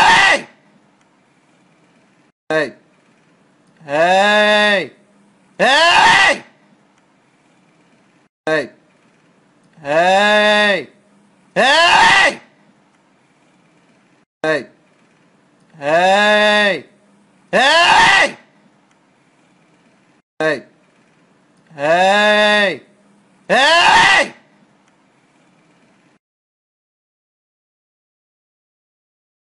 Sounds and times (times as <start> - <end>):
Speech: 2.5 - 2.8, 8.5 - 8.8, 9.8 - 11.0, 14.4 - 14.8, 20.4 - 20.7, 21.8 - 22.9.